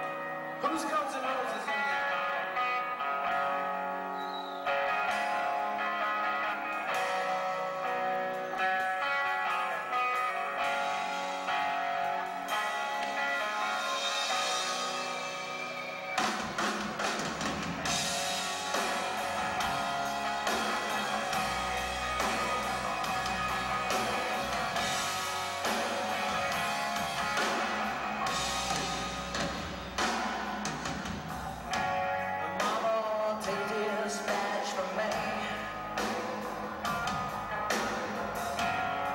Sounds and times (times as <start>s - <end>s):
Music: 0.0s - 39.1s.